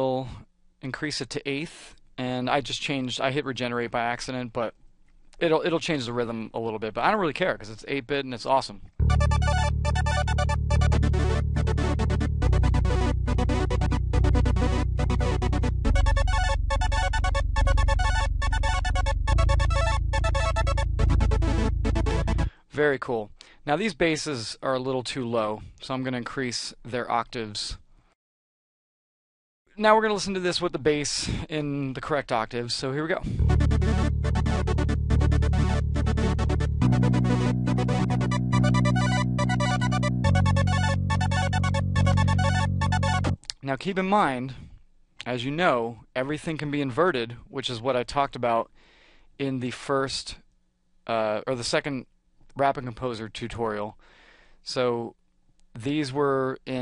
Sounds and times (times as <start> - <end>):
Soundtrack music: 9.0 - 22.5, 33.4 - 43.4.